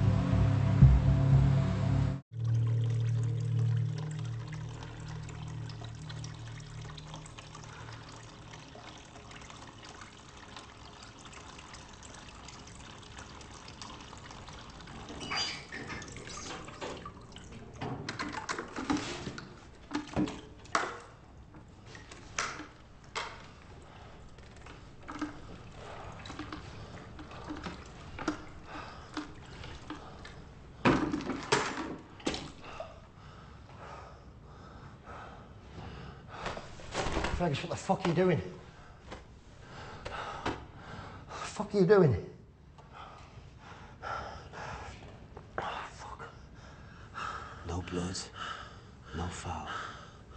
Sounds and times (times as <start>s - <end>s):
Fill (with liquid): 2.3s - 19.0s, 21.8s - 32.7s.